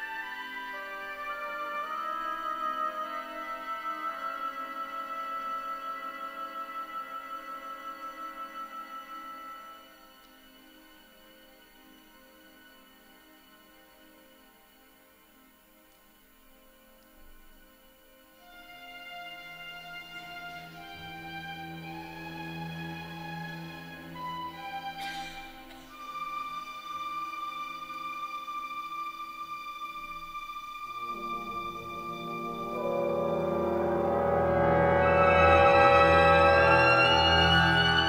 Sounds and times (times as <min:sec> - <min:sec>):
Music: 0:00.0 - 0:38.0.